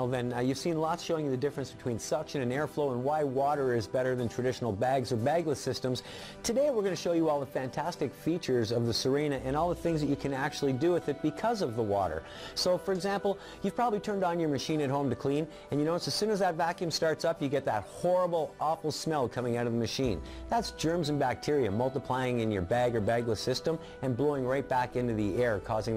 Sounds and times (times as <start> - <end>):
Music: 0.0 - 25.9
Speech: 0.0 - 25.9.